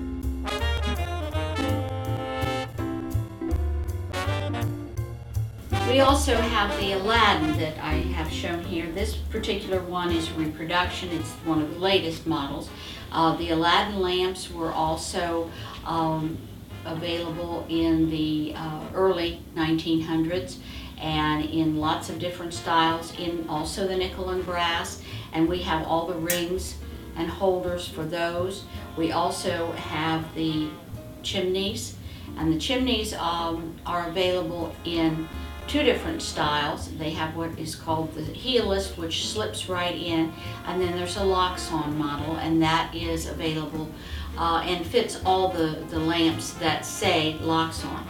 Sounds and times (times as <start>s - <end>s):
Music: 0.0s - 48.1s
Speech: 5.8s - 48.1s.